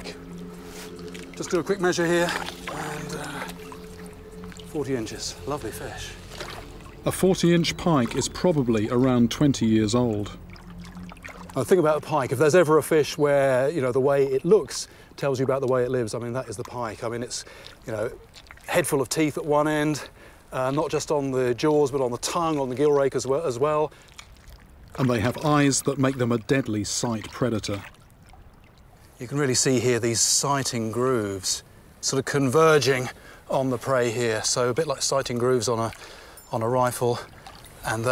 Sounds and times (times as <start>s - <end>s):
Speech: 4.8s - 6.2s, 7.1s - 10.4s, 11.6s - 23.9s, 25.0s - 27.9s, 29.2s - 38.1s.